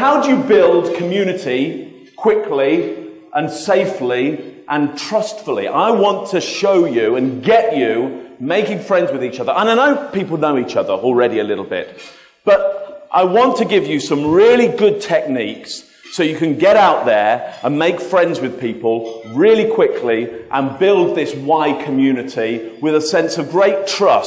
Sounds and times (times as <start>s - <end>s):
Male speech, man speaking: 0.0s - 24.2s
Narration, monologue: 0.0s - 24.2s.